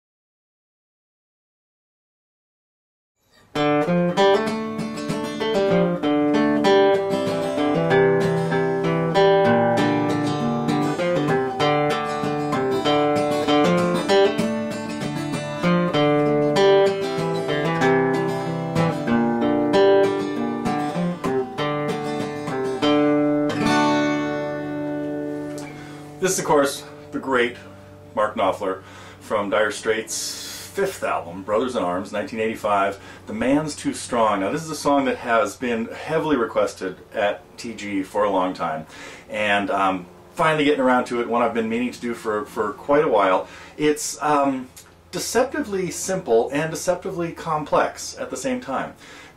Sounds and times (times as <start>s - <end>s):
Strum: 3.3s - 49.2s
Acoustic guitar: 3.3s - 49.3s.